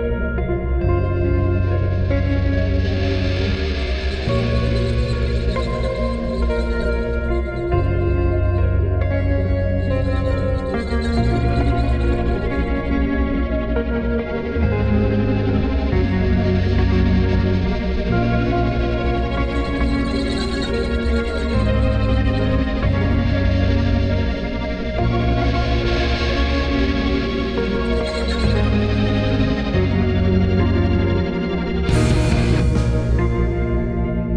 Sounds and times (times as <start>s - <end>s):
Music: 0.0s - 34.3s.